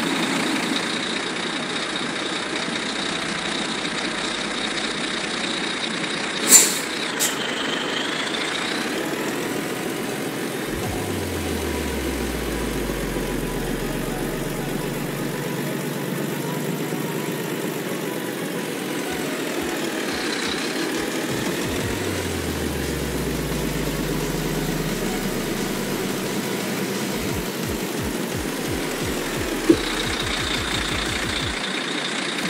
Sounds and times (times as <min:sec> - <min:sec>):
Truck: 0:00.0 - 0:32.5
Music: 0:08.7 - 0:31.6.